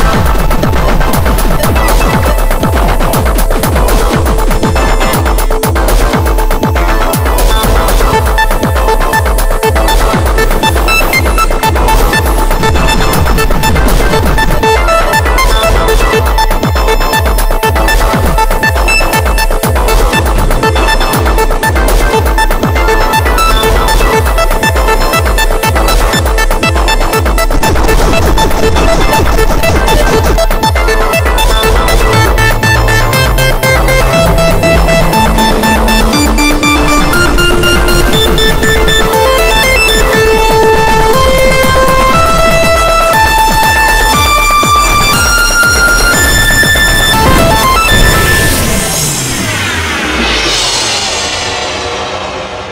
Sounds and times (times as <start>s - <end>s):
Music: 0.0s - 52.7s.